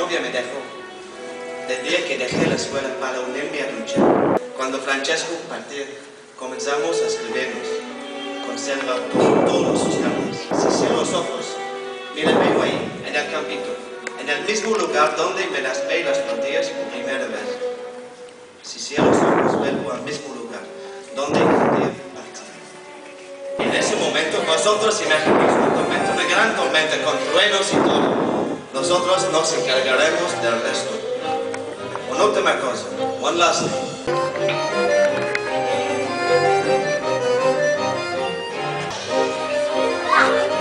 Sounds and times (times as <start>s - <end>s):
Speech: 0.0s - 0.7s, 1.7s - 4.0s, 4.6s - 7.8s, 8.5s - 11.6s, 12.2s - 17.6s, 18.7s - 22.6s, 23.6s - 28.2s, 28.8s - 31.0s, 32.1s - 33.9s
Music: 0.0s - 40.6s.